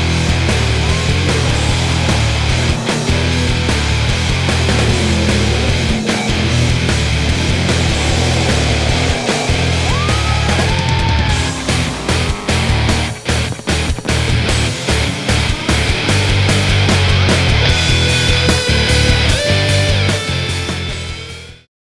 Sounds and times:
Music: 0:00.0 - 0:21.7.

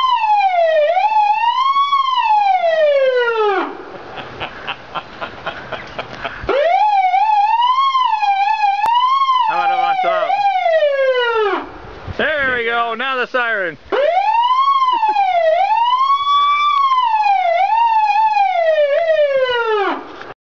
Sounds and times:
Emergency vehicle: 0:00.0 - 0:03.8, 0:06.4 - 0:11.7, 0:14.0 - 0:20.2
Siren: 0:00.0 - 0:03.9, 0:06.5 - 0:11.8, 0:13.9 - 0:20.2
Speech: 0:09.5 - 0:10.5, 0:12.2 - 0:13.8.

